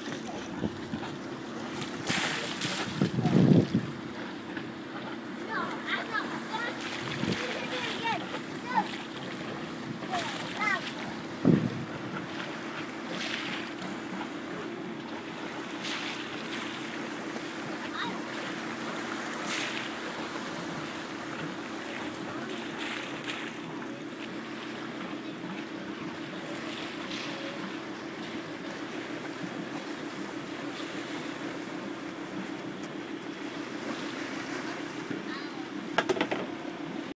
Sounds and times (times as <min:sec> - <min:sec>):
Speech: 0:05.5 - 0:09.0, 0:10.0 - 0:11.0, 0:34.6 - 0:35.8.